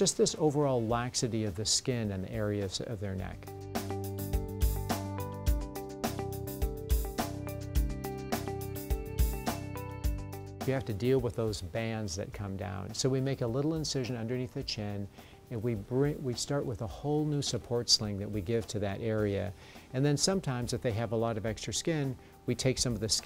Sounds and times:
Speech: 0.0 - 3.5, 10.6 - 23.2
Music: 0.0 - 23.2.

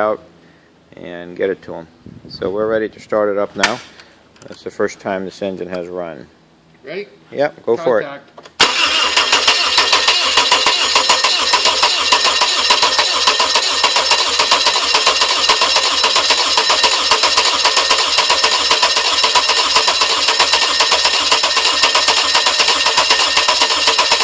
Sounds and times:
Speech: 0.9 - 3.8, 4.4 - 8.3
Engine starting: 8.6 - 24.2.

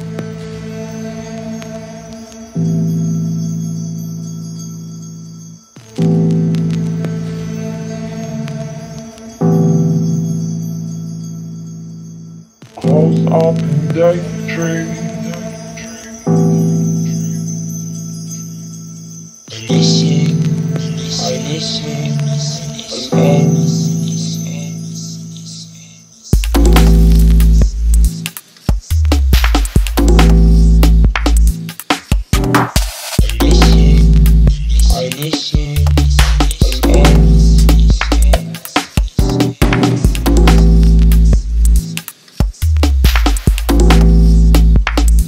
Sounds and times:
Music: 0.0 - 45.2.

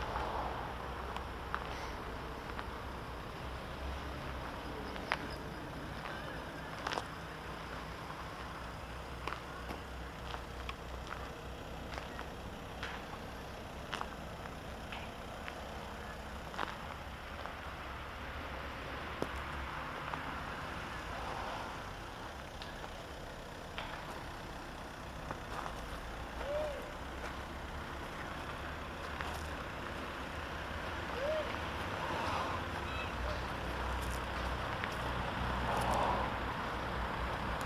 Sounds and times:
Car: 0.0 - 37.6.

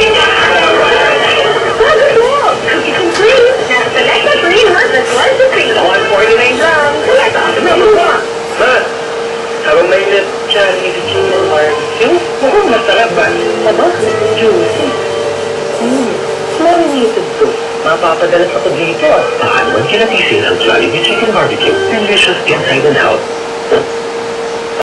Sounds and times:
Speech: 0.0 - 9.0, 9.6 - 15.0, 15.8 - 23.8
Music: 11.0 - 23.2.

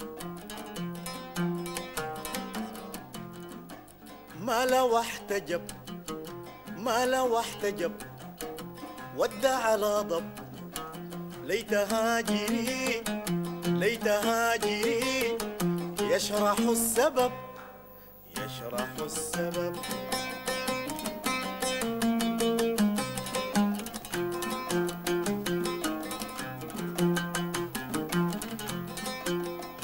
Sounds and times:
Bowed string instrument: 0.0 - 29.8.

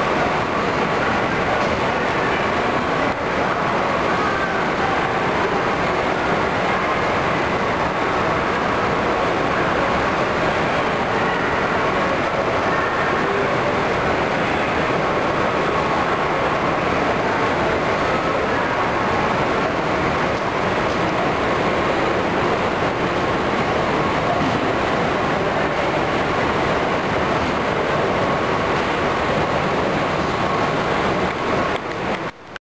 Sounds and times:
Vehicle: 0.0 - 32.6.

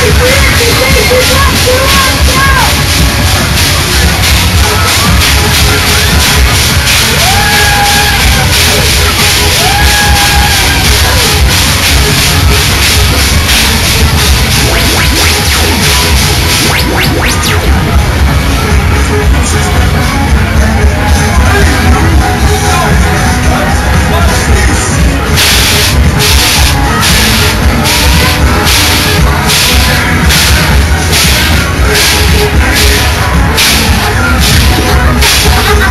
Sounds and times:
Speech: 0.0 - 2.9, 20.6 - 25.4
Music: 0.0 - 35.9.

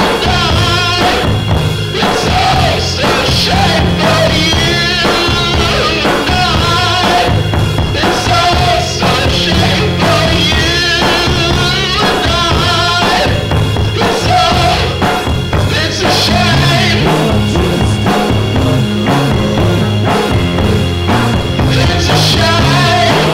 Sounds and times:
Music: 0.0 - 23.3.

